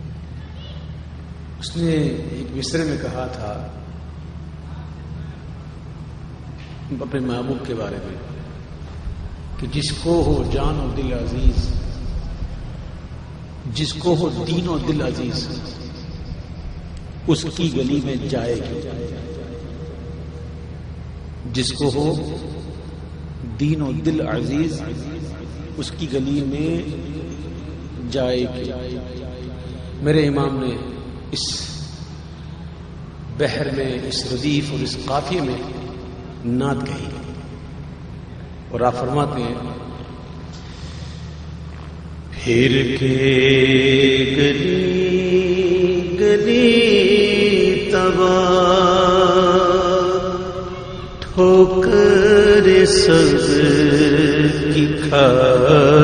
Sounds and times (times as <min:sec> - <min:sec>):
Speech: 0:01.6 - 0:03.8, 0:06.9 - 0:08.3, 0:09.6 - 0:11.9, 0:13.7 - 0:15.8, 0:17.3 - 0:19.4, 0:21.5 - 0:22.5, 0:23.4 - 0:27.0, 0:28.0 - 0:29.0, 0:30.0 - 0:31.9, 0:33.4 - 0:37.3, 0:38.7 - 0:40.0.